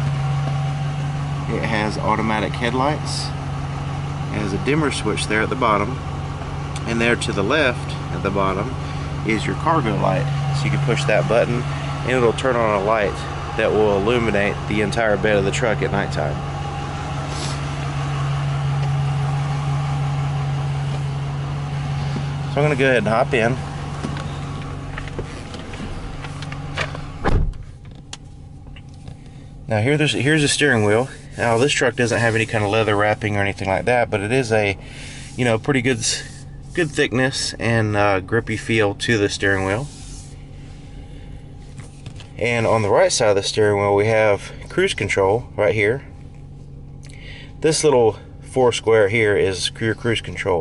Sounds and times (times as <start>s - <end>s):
Car: 0.0s - 50.6s
Outside, urban or manmade: 0.0s - 50.6s
Speech: 1.5s - 3.4s, 4.3s - 6.0s, 6.8s - 16.4s, 22.5s - 23.6s, 29.7s - 34.8s, 35.4s - 39.9s, 42.4s - 46.1s, 47.6s - 50.6s.